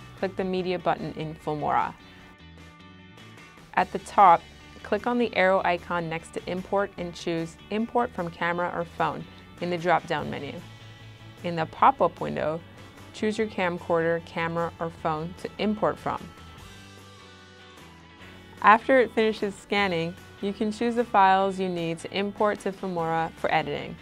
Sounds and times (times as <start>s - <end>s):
Music: 0.0s - 24.0s
Speech: 0.2s - 2.0s, 3.8s - 10.6s, 11.5s - 12.6s, 13.2s - 16.3s, 18.6s - 24.0s.